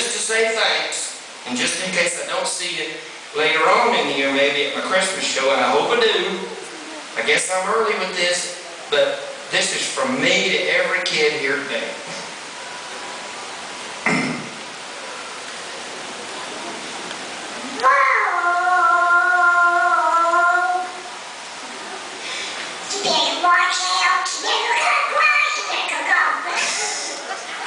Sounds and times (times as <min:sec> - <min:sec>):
Speech: 0:00.0 - 0:12.2, 0:22.9 - 0:27.4.